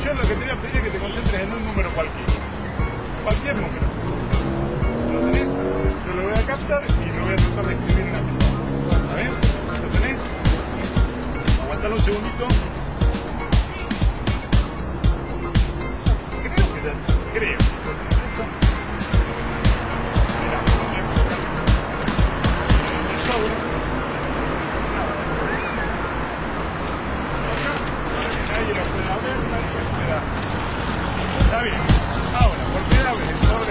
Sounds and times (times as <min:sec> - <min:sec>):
Music: 0:00.0 - 0:33.7.